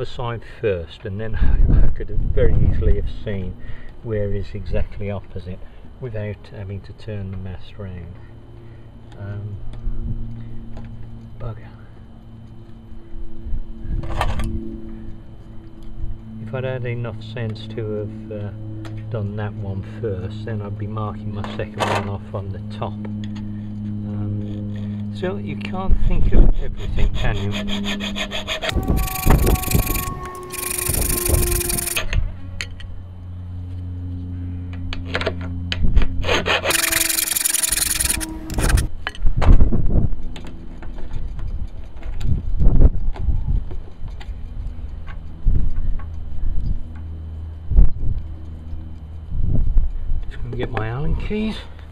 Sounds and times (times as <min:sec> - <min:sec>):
Filing (rasp): 0:26.6 - 0:32.0, 0:36.2 - 0:38.9
Rub: 0:26.8 - 0:32.0.